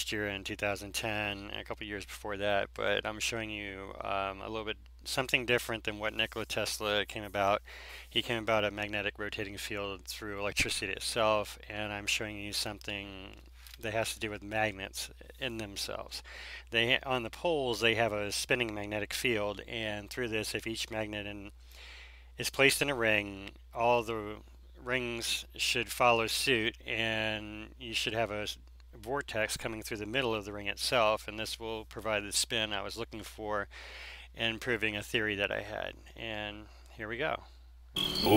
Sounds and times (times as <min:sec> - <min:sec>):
Speech: 0:00.0 - 0:21.5, 0:22.4 - 0:33.7, 0:34.4 - 0:37.5.